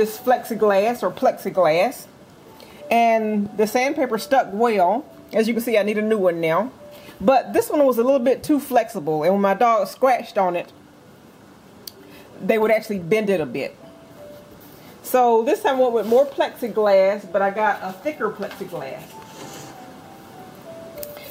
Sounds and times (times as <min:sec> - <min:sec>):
Speech: 0:00.0 - 0:02.1, 0:02.9 - 0:10.7, 0:12.4 - 0:13.8, 0:15.1 - 0:19.1
Music: 0:00.0 - 0:21.3.